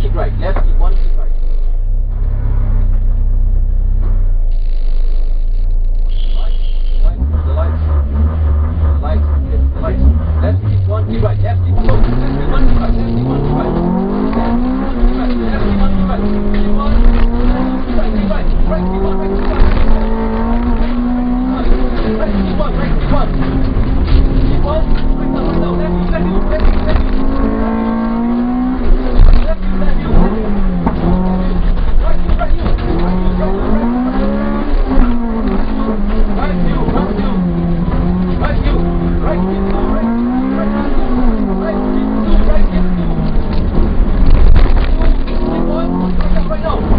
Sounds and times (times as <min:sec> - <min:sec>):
Speech: 0:00.0 - 0:01.3, 0:06.1 - 0:07.9, 0:09.0 - 0:13.8, 0:15.1 - 0:17.2, 0:17.8 - 0:19.4, 0:21.5 - 0:23.4, 0:24.6 - 0:27.2, 0:29.4 - 0:30.4, 0:31.4 - 0:34.3, 0:35.6 - 0:37.4, 0:38.4 - 0:43.1, 0:44.9 - 0:46.9.